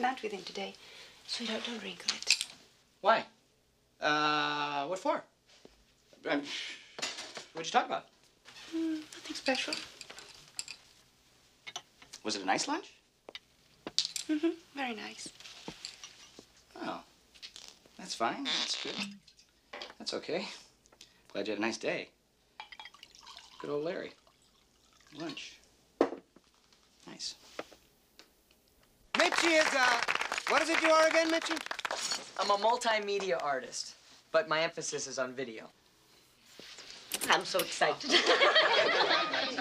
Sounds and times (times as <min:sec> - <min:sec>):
Inside, small room: 0:00.0 - 0:39.6.